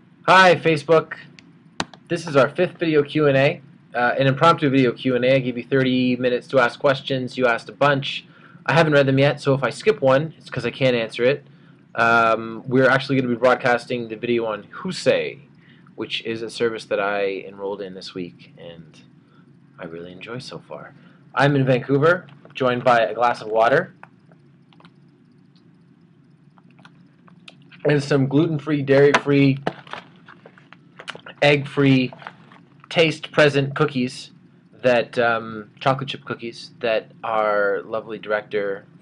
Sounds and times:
Speech: 0.3s - 1.4s, 2.1s - 11.4s, 12.0s - 19.0s, 19.8s - 24.0s, 27.5s - 29.7s, 31.0s - 38.9s.

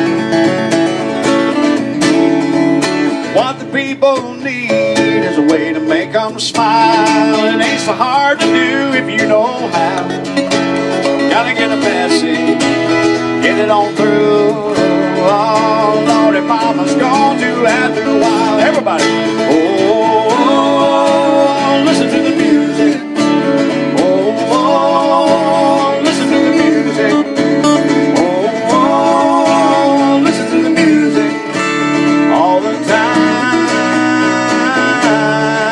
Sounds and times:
Happy music: 0.0s - 35.7s.

